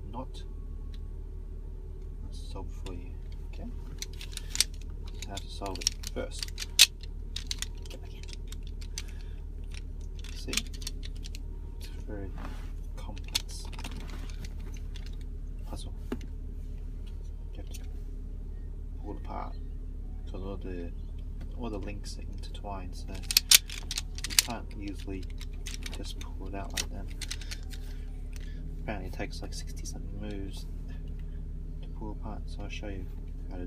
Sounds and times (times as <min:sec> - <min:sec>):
Speech: 0:00.0 - 0:00.5, 0:02.2 - 0:03.8, 0:05.2 - 0:06.5, 0:10.4 - 0:10.7, 0:11.8 - 0:13.8, 0:15.6 - 0:16.1, 0:19.0 - 0:19.6, 0:20.2 - 0:23.3, 0:24.4 - 0:27.2, 0:28.8 - 0:30.7, 0:31.8 - 0:33.6.